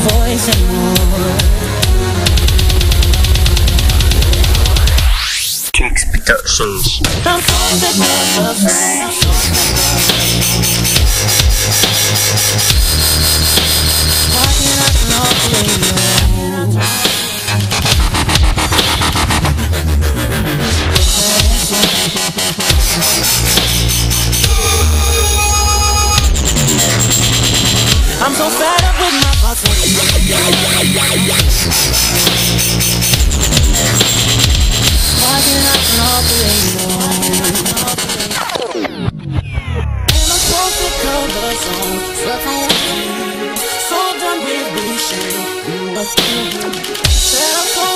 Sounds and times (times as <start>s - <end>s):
Dubstep: 0.0s - 47.9s.